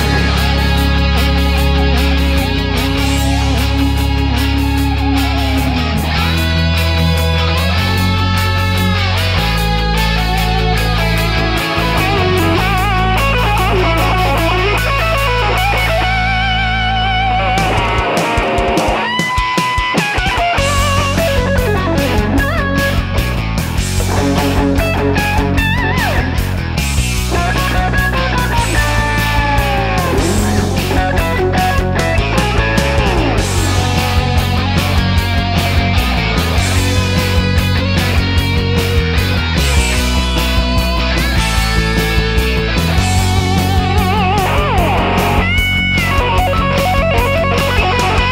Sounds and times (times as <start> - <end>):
Music: 0.0 - 48.3.